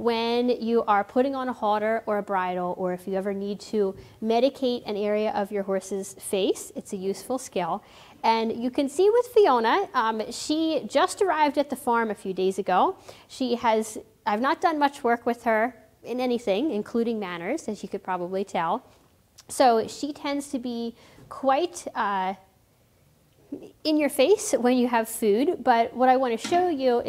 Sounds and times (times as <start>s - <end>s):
Speech: 0.0s - 22.5s, 23.6s - 27.0s.